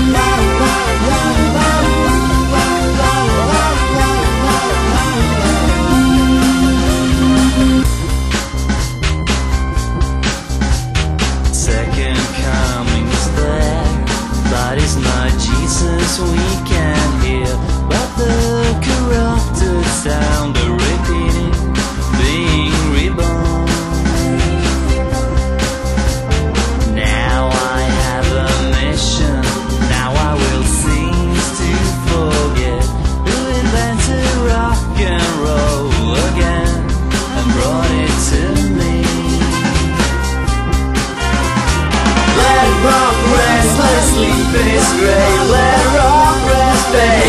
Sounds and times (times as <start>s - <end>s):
Independent music: 0.0s - 47.2s.